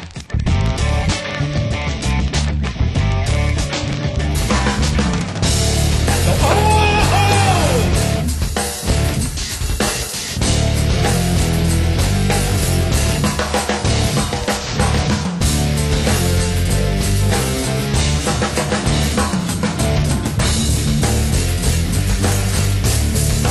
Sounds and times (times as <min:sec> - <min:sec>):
Music: 0:00.0 - 0:23.5
Speech: 0:06.3 - 0:08.0.